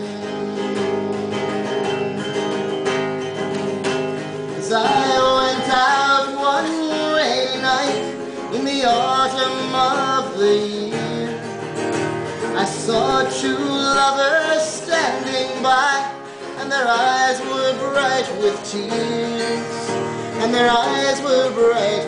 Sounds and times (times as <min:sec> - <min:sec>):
Country: 0:00.0 - 0:22.0
Inside, large room or hall: 0:00.0 - 0:22.0
Yodeling: 0:04.6 - 0:11.5, 0:12.6 - 0:22.0.